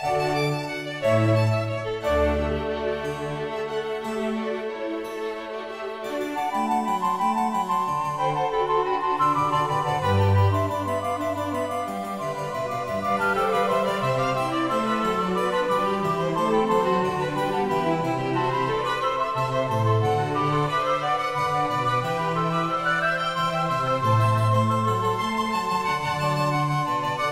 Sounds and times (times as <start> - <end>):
Piano: 0.0 - 27.3.